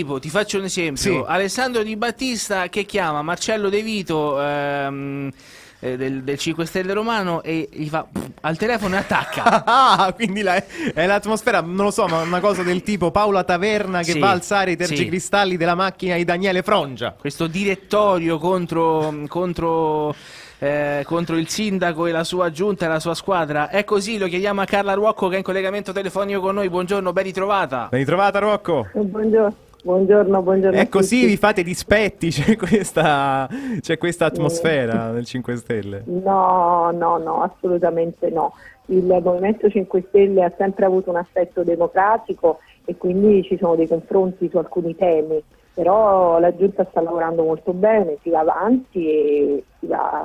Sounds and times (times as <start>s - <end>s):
Speech: 0.0s - 50.2s.